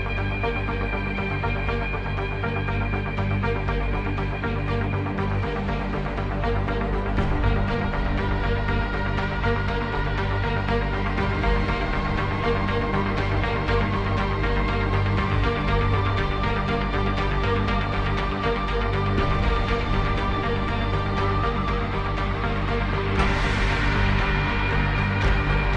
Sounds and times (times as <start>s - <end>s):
Exciting music: 0.0s - 25.7s.